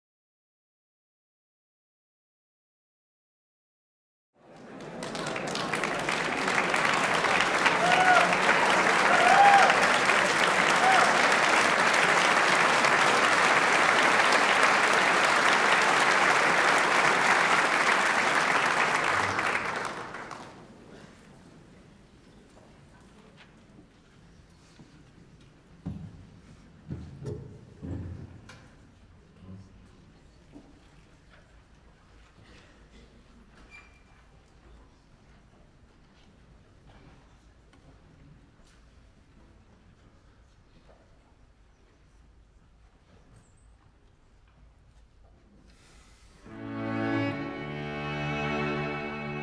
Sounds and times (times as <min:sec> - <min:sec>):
Applause: 0:04.4 - 0:20.8.